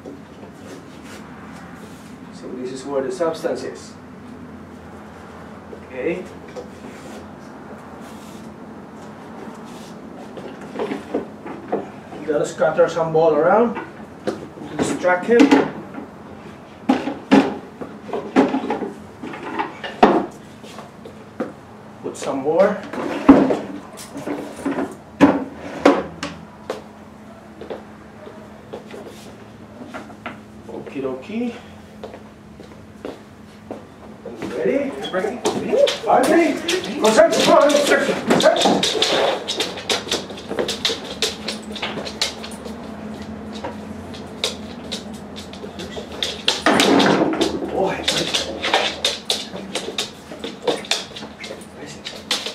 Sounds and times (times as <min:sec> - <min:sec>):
Speech: 0:02.4 - 0:04.0, 0:05.9 - 0:06.4, 0:12.2 - 0:13.8, 0:22.0 - 0:22.9, 0:30.7 - 0:31.6, 0:34.4 - 0:38.8, 0:47.7 - 0:48.4, 0:51.8 - 0:52.1.